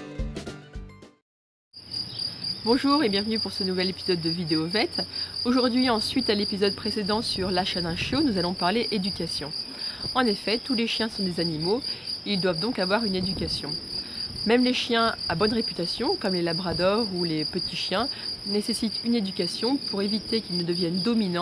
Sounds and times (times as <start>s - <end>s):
Speech: 2.6s - 13.8s, 14.4s - 21.4s.